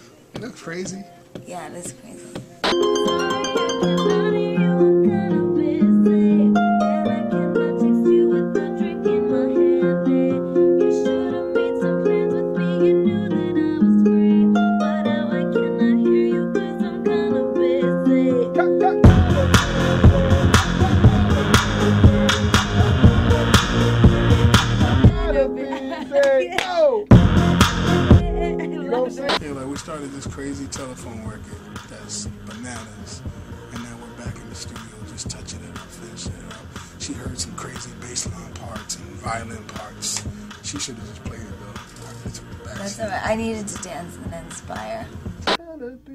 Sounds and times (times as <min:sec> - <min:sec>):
Music: 0:00.0 - 0:46.1.